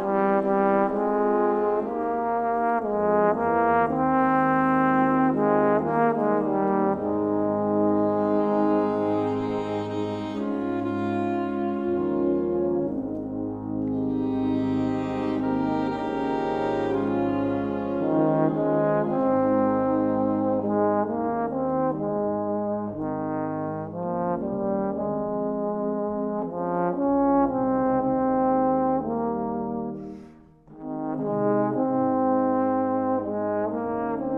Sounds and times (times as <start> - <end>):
Trombone: 0.0 - 34.3.